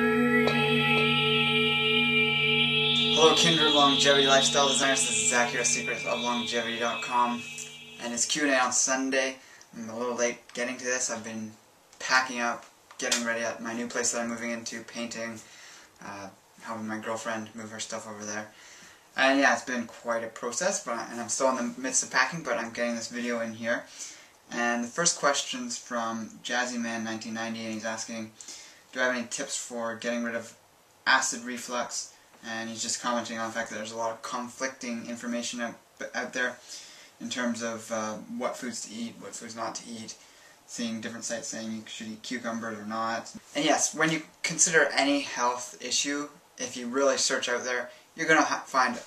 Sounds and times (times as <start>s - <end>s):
Speech: 3.1s - 18.6s, 19.2s - 23.9s, 24.5s - 36.6s, 37.2s - 49.0s.